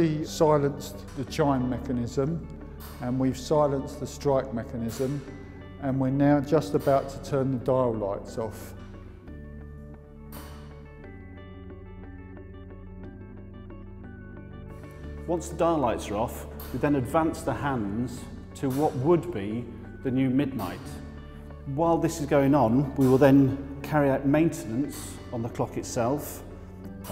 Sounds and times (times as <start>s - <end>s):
Speech: 0.0s - 2.4s, 3.0s - 5.2s, 5.8s - 8.8s, 15.3s - 21.0s, 21.7s - 26.4s
Music: 0.0s - 27.1s.